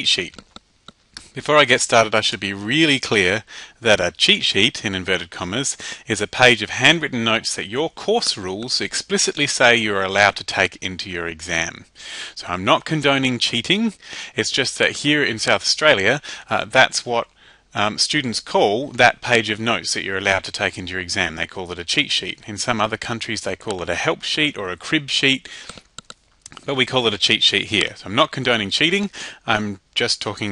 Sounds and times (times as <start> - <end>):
Speech: 0.0 - 0.4, 1.3 - 25.5, 26.5 - 30.5.